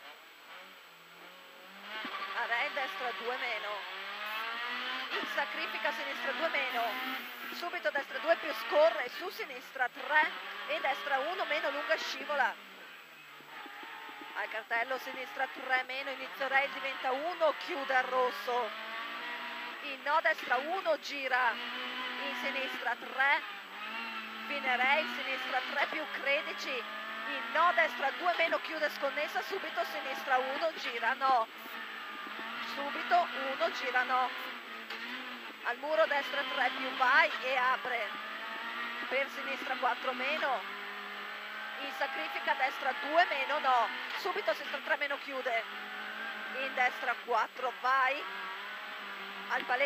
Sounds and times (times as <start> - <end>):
Car: 0.0 - 49.8
Speech: 2.3 - 3.9, 5.1 - 12.6, 14.4 - 18.7, 19.8 - 21.6, 22.2 - 23.5, 24.4 - 31.8, 32.6 - 34.5, 35.6 - 38.2, 39.0 - 40.6, 41.8 - 45.7, 46.5 - 48.3, 49.5 - 49.8.